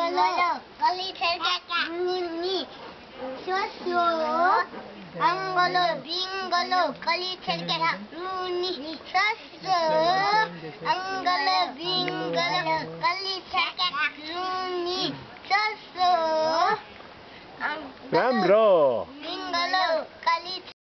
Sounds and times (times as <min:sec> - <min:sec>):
Speech: 0:09.6 - 0:13.2, 0:18.1 - 0:19.9.